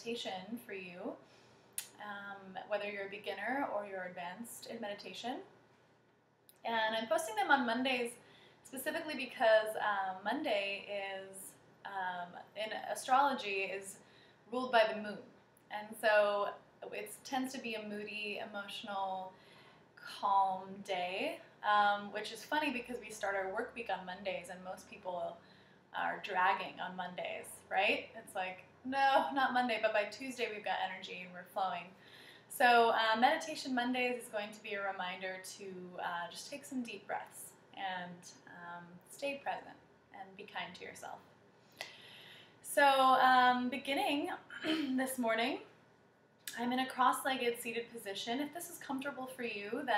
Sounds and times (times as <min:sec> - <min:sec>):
Speech: 0:00.0 - 0:01.2, 0:01.8 - 0:05.5, 0:06.6 - 0:19.4, 0:20.0 - 0:25.4, 0:26.0 - 0:41.3, 0:42.7 - 0:45.7, 0:46.5 - 0:49.9.